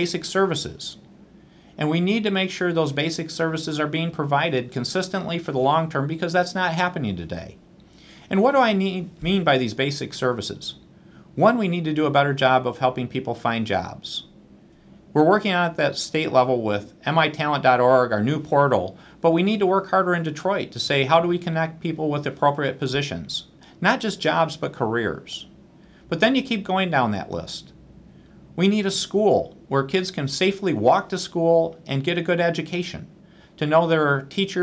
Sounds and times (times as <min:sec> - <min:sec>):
Speech: 0:00.0 - 0:01.1, 0:01.8 - 0:07.6, 0:08.3 - 0:10.8, 0:11.4 - 0:14.4, 0:15.2 - 0:25.5, 0:26.1 - 0:27.8, 0:28.6 - 0:34.6.